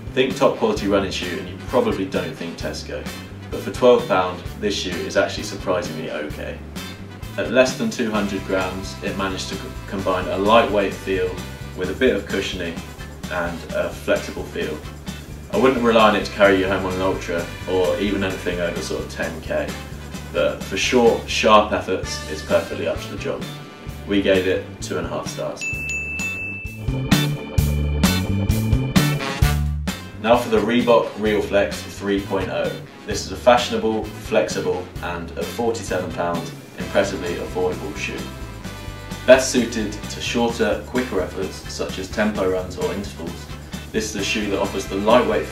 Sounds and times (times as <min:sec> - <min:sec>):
Inside, small room: 0:00.0 - 0:26.5, 0:28.1 - 0:45.5
Music: 0:00.0 - 0:45.5
Speech: 0:00.1 - 0:06.6, 0:07.4 - 0:14.8, 0:15.5 - 0:19.8, 0:20.4 - 0:25.6, 0:30.2 - 0:38.3, 0:39.3 - 0:45.5.